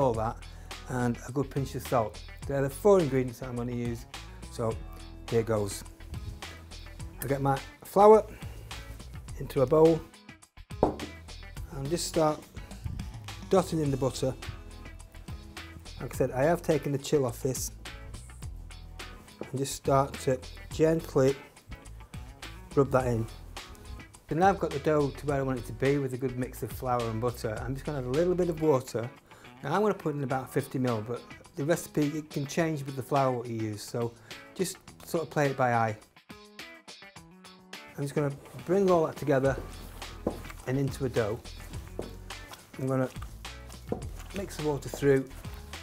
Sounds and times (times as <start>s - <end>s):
Speech: 0.0s - 5.8s, 7.2s - 8.3s, 9.4s - 10.1s, 11.7s - 12.4s, 13.5s - 14.4s, 16.0s - 17.7s, 19.5s - 21.4s, 22.7s - 23.3s, 24.3s - 36.0s, 38.0s - 39.6s, 40.6s - 41.4s, 42.8s - 43.2s, 44.3s - 45.4s
Music: 0.0s - 45.8s.